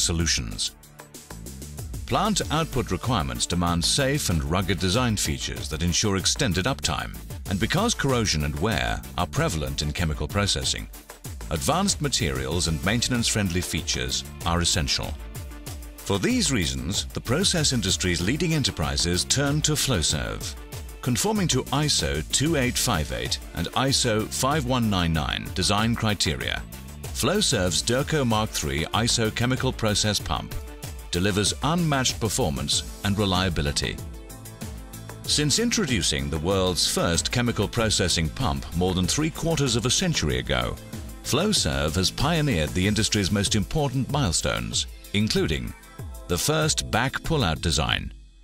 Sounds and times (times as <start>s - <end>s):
Speech: 0.0s - 0.7s, 2.1s - 10.9s, 11.5s - 15.2s, 16.1s - 34.0s, 35.3s - 48.2s
Music: 0.0s - 48.4s.